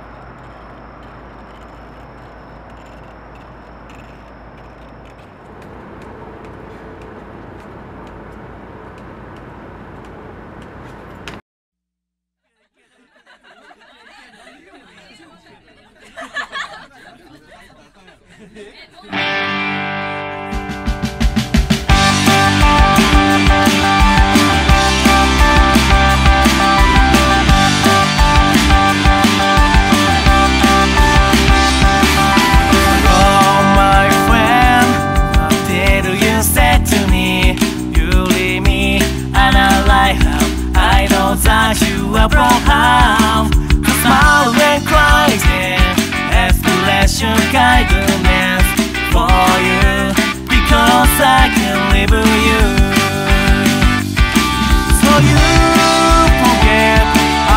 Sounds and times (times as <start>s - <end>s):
Music: 19.2s - 57.5s.